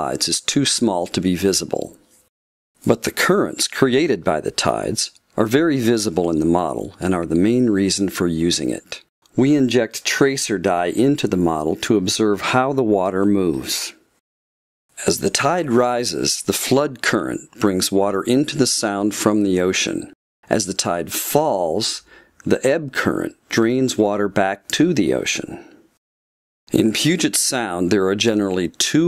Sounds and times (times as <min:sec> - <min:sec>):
Speech: 0:00.0 - 0:02.0, 0:02.8 - 0:14.0, 0:15.0 - 0:25.8, 0:26.7 - 0:29.0.